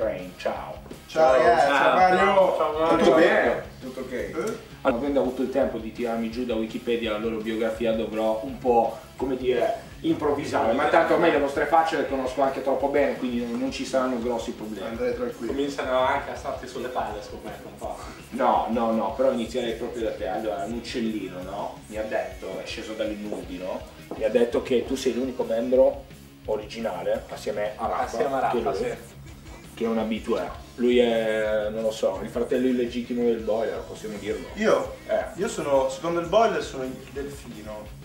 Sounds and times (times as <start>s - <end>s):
Speech: 0.0s - 29.1s, 29.8s - 38.0s
Music: 0.0s - 38.0s.